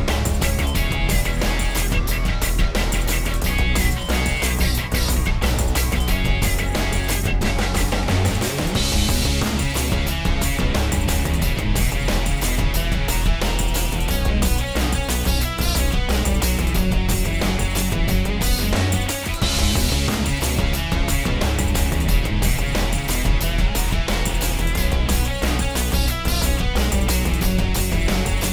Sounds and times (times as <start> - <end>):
Music: 0.0 - 28.5.